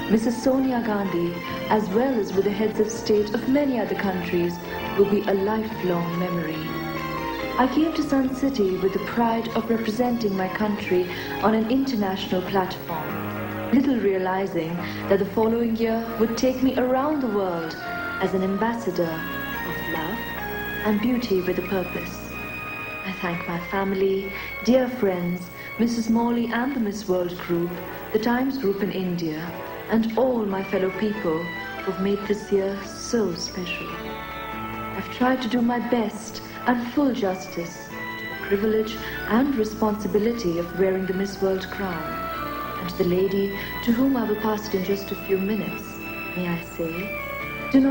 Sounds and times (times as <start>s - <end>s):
Music: 0.0s - 47.9s
Speech: 0.1s - 6.7s, 7.6s - 20.2s, 20.8s - 22.2s, 23.1s - 34.0s, 35.0s - 37.8s, 38.5s - 42.2s, 42.8s - 47.9s.